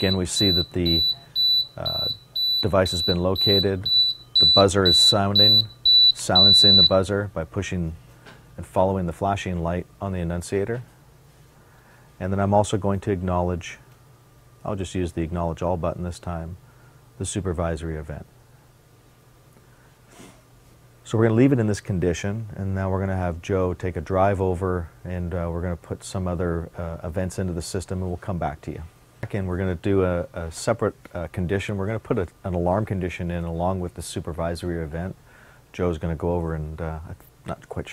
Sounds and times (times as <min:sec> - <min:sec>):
Speech: 0:00.0 - 0:08.0, 0:08.6 - 0:10.9, 0:12.2 - 0:13.9, 0:14.6 - 0:16.6, 0:17.2 - 0:18.3, 0:21.0 - 0:37.9.